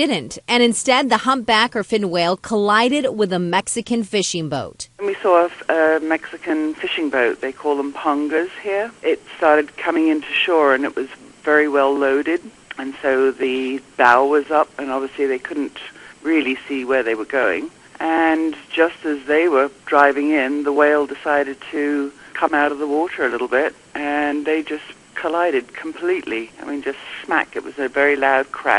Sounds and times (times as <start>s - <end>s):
Speech: 0.0s - 28.7s.